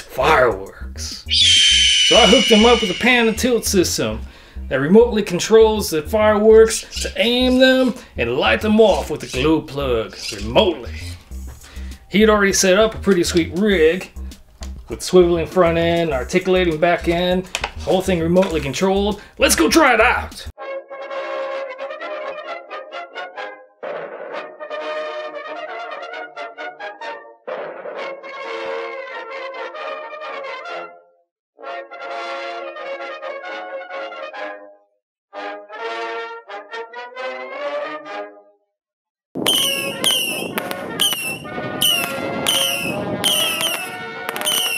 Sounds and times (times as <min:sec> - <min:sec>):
Speech: 0:00.0 - 0:01.3, 0:02.1 - 0:11.2, 0:12.1 - 0:14.1, 0:14.9 - 0:20.5.